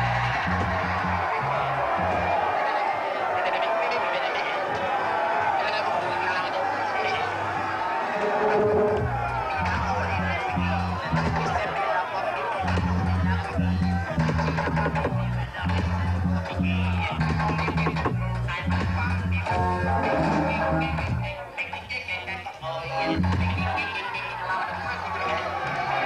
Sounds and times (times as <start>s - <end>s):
Music: 0.0s - 26.0s.